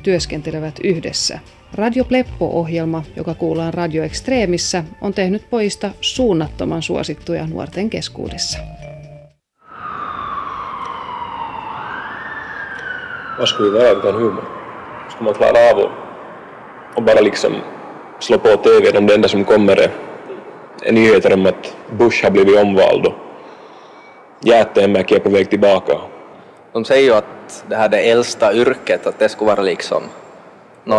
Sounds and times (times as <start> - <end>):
Speech: 0.0 - 8.7, 18.2 - 23.2, 24.4 - 26.1, 26.8 - 30.1
Music: 0.0 - 9.4.